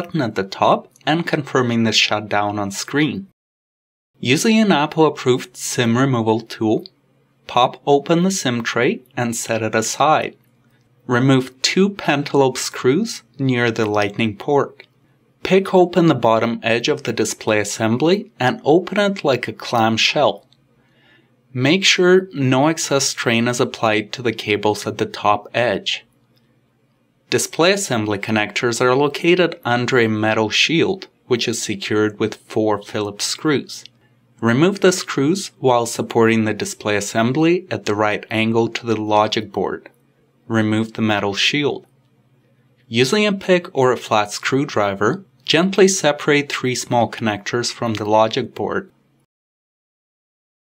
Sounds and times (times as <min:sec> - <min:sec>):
Speech: 0:00.0 - 0:03.4, 0:04.2 - 0:10.4, 0:11.1 - 0:20.6, 0:21.5 - 0:26.2, 0:27.3 - 0:42.0, 0:42.8 - 0:49.0.